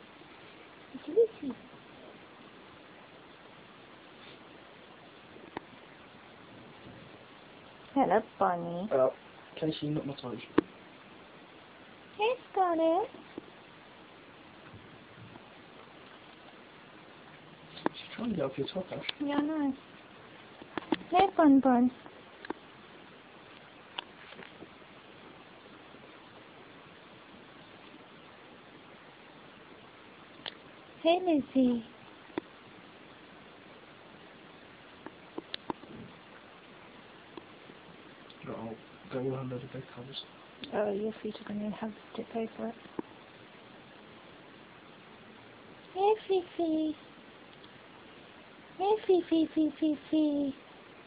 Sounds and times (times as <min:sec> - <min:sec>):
Speech: 0:12.2 - 0:13.1, 0:31.0 - 0:31.9, 0:46.0 - 0:47.0, 0:48.8 - 0:50.6.